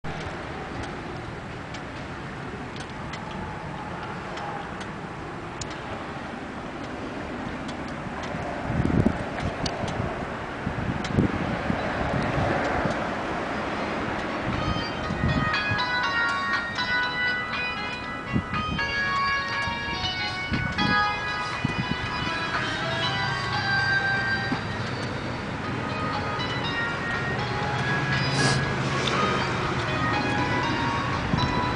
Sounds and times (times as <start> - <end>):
Engine: 0.1 - 14.5, 22.5 - 31.7.